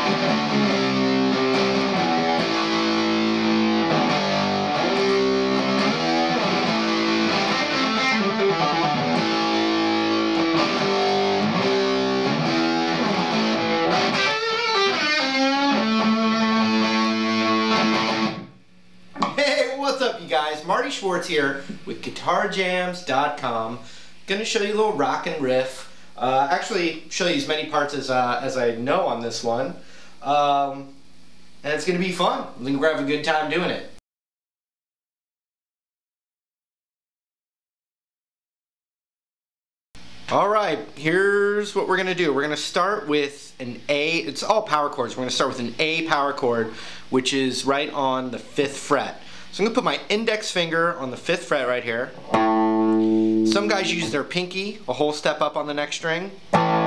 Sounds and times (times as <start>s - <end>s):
Speech: 19.2s - 31.0s, 31.6s - 34.0s, 40.3s - 52.2s, 53.5s - 56.4s.